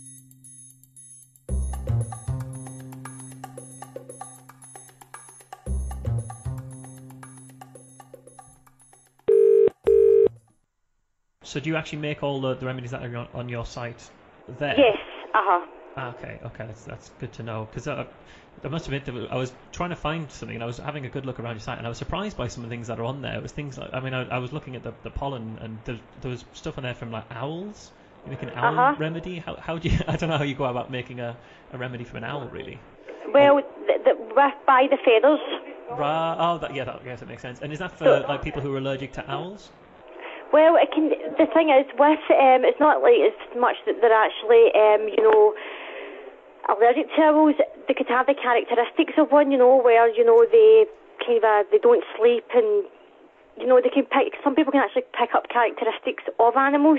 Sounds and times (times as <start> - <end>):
Speech: 11.4 - 39.7, 40.6 - 45.6, 46.7 - 52.9.